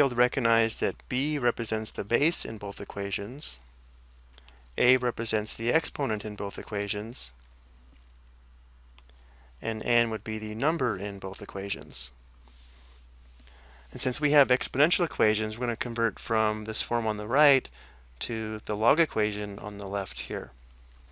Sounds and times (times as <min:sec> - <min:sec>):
Speech: 0:00.0 - 0:03.6, 0:04.8 - 0:07.4, 0:09.6 - 0:12.2, 0:13.9 - 0:20.6.